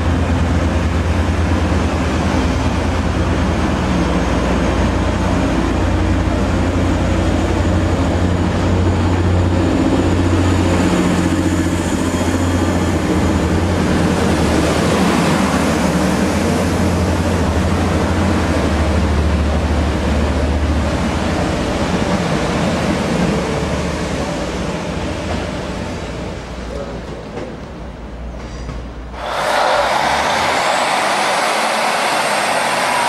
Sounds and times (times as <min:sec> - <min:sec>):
Railroad car, train wagon: 0:00.0 - 0:33.0
Subway, metro, underground: 0:00.0 - 0:33.0
Train: 0:00.0 - 0:33.0.